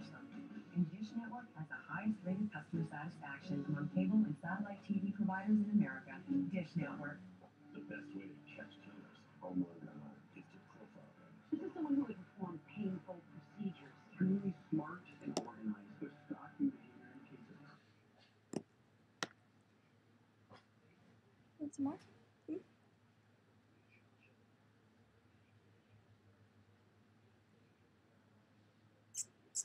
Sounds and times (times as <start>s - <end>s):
Speech: 0.0s - 17.8s, 21.6s - 22.6s.